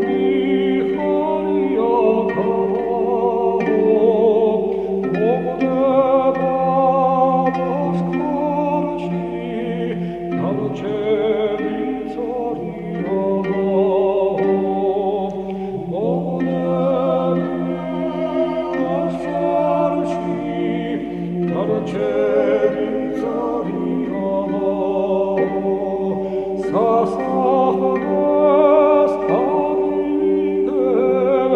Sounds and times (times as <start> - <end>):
Chant: 0.0 - 31.5.